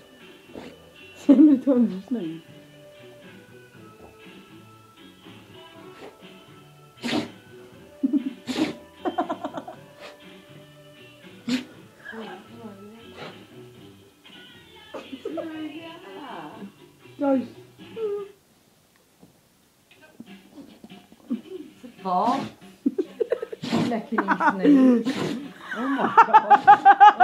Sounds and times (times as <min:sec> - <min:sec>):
Music: 0:00.0 - 0:18.4, 0:19.9 - 0:27.2.